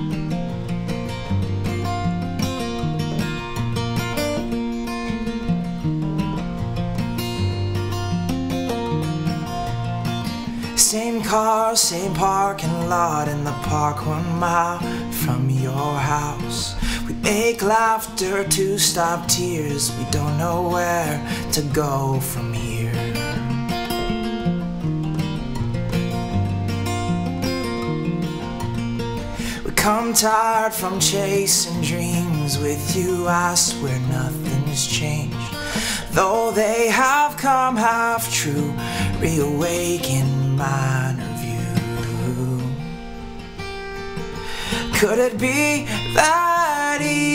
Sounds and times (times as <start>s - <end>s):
Music: 0.0s - 47.3s.